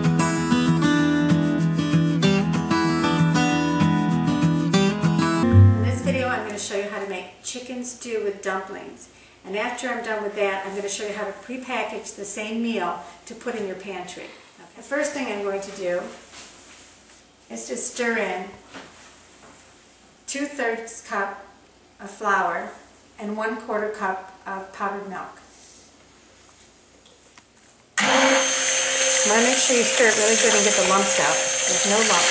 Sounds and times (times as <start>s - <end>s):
Speech: 5.8s - 16.2s, 17.5s - 18.6s, 20.3s - 25.5s, 29.3s - 32.3s.